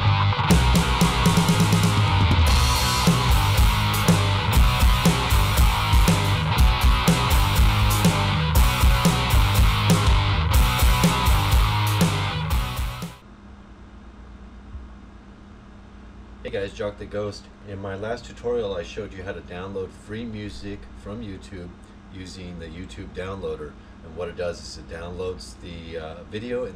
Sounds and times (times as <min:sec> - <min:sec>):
Speech: 0:16.4 - 0:26.7.